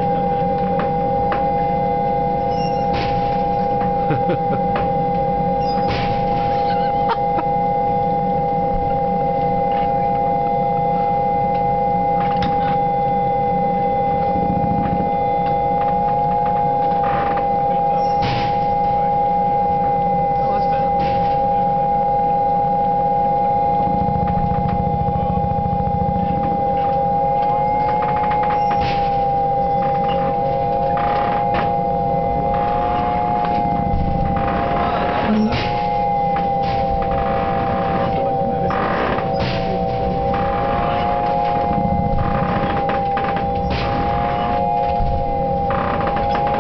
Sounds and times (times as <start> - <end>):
Aircraft: 4.8 - 18.6, 19.9 - 29.2.